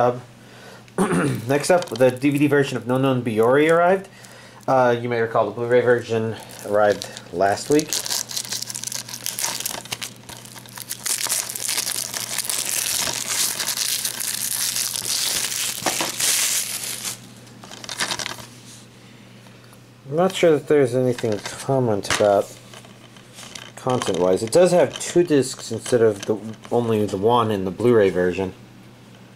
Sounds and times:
Tearing: 0:07.7 - 0:17.2.

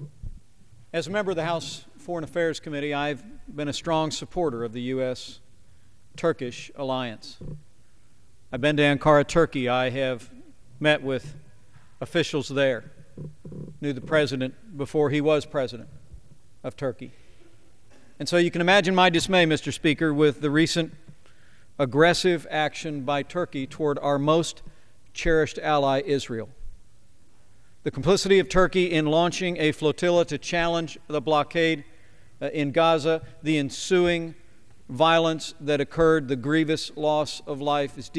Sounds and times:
Speech: 0:01.0 - 0:05.4, 0:06.2 - 0:07.4, 0:08.6 - 0:11.4, 0:12.0 - 0:12.9, 0:13.8 - 0:15.9, 0:16.6 - 0:17.1, 0:18.2 - 0:21.0, 0:21.8 - 0:24.6, 0:25.2 - 0:26.6, 0:27.9 - 0:38.1.

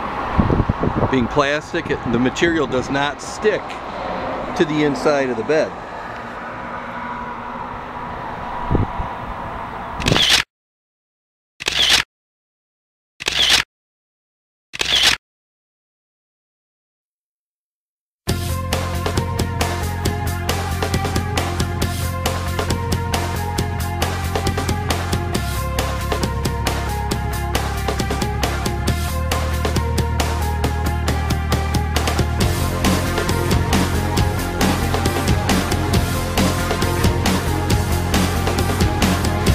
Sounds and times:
Vehicle: 0:00.0 - 0:10.5, 0:19.2 - 0:39.5
Music: 0:18.3 - 0:39.5.

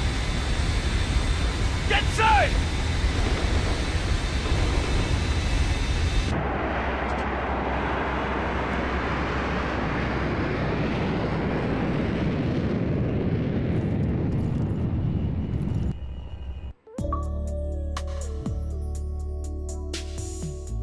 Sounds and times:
Music: 0:16.7 - 0:20.8.

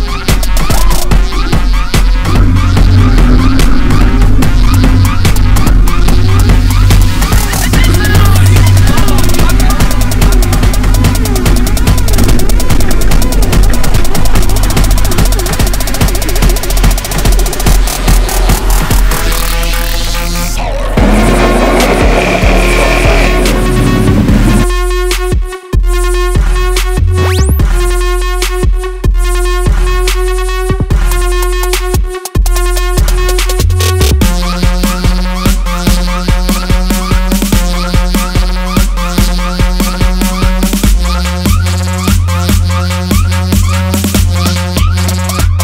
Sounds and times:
Music: 0:00.0 - 0:45.6.

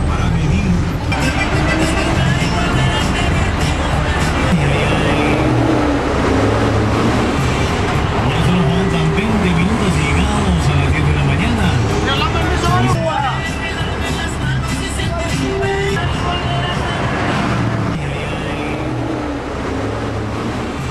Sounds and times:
Speech: 0:00.0 - 0:03.3, 0:08.2 - 0:13.8
Bus: 0:00.0 - 0:20.9
Music: 0:00.9 - 0:06.2, 0:07.2 - 0:18.6.

